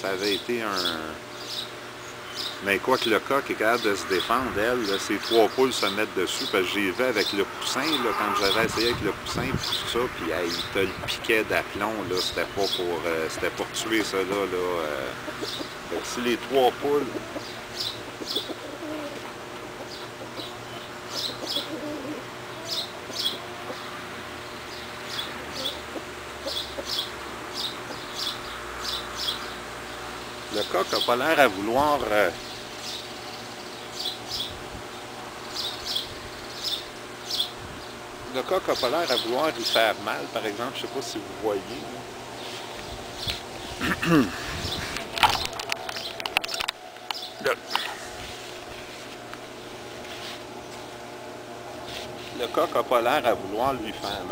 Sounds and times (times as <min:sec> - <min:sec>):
Speech: 0:00.0 - 0:01.2, 0:02.6 - 0:15.2, 0:15.9 - 0:17.2, 0:30.5 - 0:32.4, 0:38.3 - 0:42.0, 0:52.4 - 0:54.3
Bird: 0:00.2 - 0:29.6.